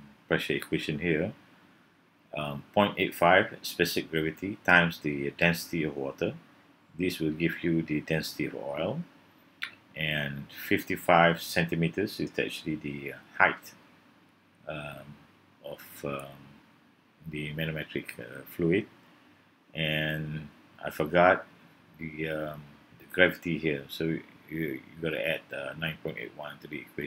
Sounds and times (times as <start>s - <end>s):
Speech: 0.0s - 1.4s, 2.4s - 6.4s, 7.0s - 13.8s, 14.7s - 16.6s, 17.3s - 18.9s, 19.8s - 27.0s.